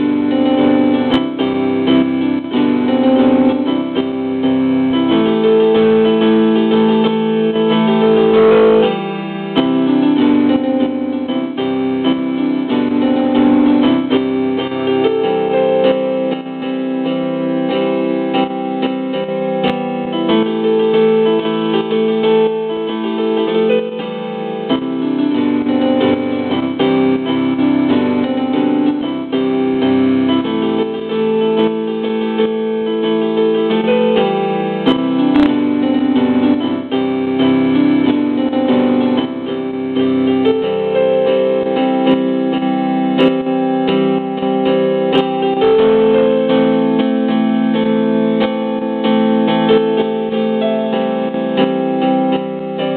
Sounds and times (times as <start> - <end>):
Music: 0.0 - 52.9.